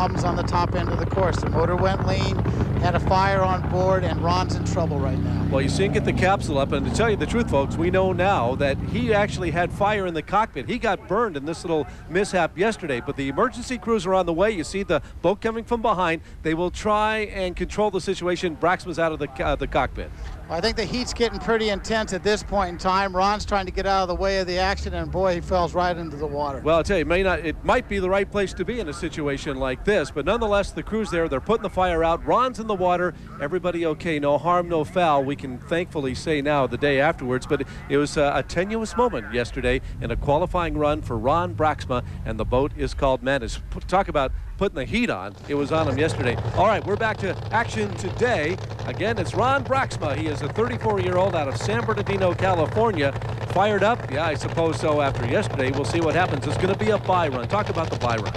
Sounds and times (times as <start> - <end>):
Speech: 0.0 - 58.3.